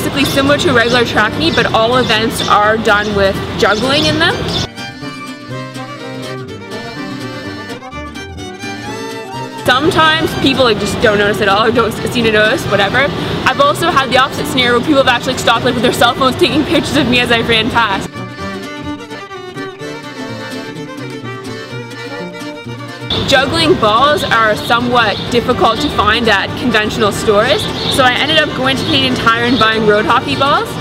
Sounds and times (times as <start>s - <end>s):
Speech: 0.0s - 4.4s, 9.7s - 18.1s, 23.3s - 30.8s
Music: 0.0s - 30.8s
Outside, urban or manmade: 0.0s - 30.8s.